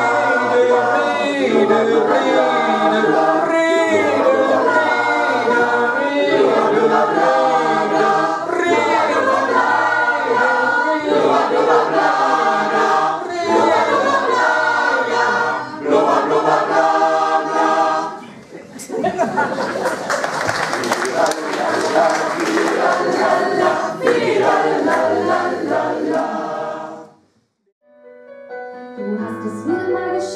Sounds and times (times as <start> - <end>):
Choir: 0.0 - 18.3, 19.1 - 27.2
Vocal music: 0.0 - 18.9, 20.7 - 27.2, 29.0 - 30.3
Gospel music: 0.0 - 27.4.